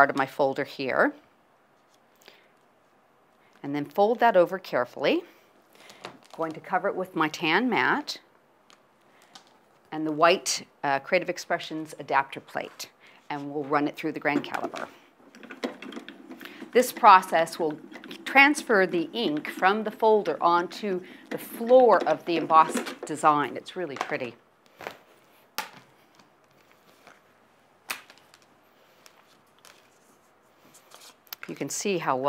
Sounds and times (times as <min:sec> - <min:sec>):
Speech: 0:00.0 - 0:01.2, 0:03.6 - 0:05.3, 0:06.4 - 0:08.2, 0:10.0 - 0:14.8, 0:16.8 - 0:24.4, 0:31.4 - 0:32.2
Inside, small room: 0:00.0 - 0:32.2.